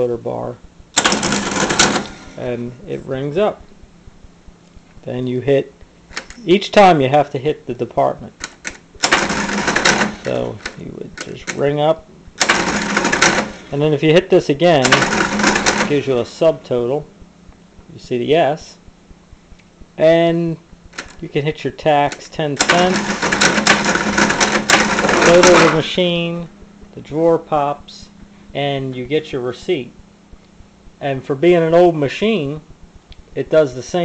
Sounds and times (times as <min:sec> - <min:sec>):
Speech: 0:00.0 - 0:00.6, 0:02.4 - 0:03.7, 0:05.0 - 0:05.8, 0:06.4 - 0:08.4, 0:10.2 - 0:12.1, 0:13.7 - 0:15.0, 0:15.9 - 0:17.1, 0:17.9 - 0:18.8, 0:20.0 - 0:20.6, 0:21.2 - 0:23.0, 0:25.1 - 0:30.0, 0:31.0 - 0:32.7, 0:33.4 - 0:34.0
Cash register: 0:01.0 - 0:02.5, 0:09.0 - 0:11.6, 0:12.4 - 0:13.9, 0:14.8 - 0:16.2, 0:22.6 - 0:26.0.